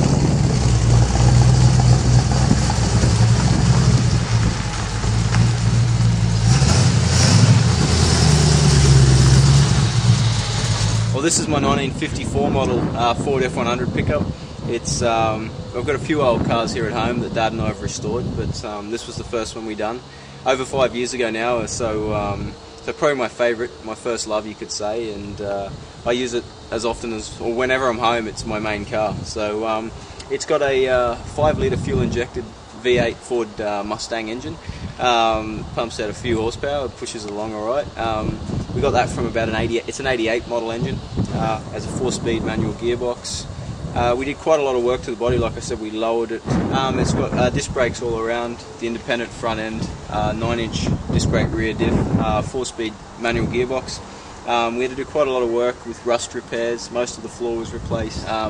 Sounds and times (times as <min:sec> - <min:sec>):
Speech: 0:11.1 - 0:58.4.